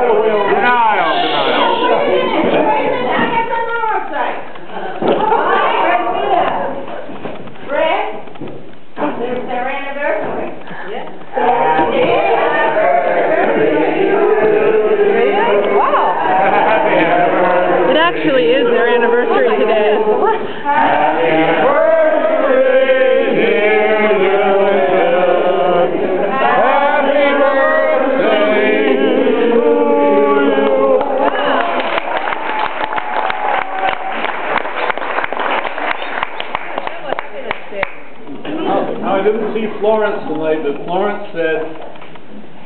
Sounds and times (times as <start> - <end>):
Female speech, woman speaking: 1.5 - 7.0, 7.7 - 8.2, 9.0 - 11.2, 17.9 - 20.4, 36.8 - 38.9.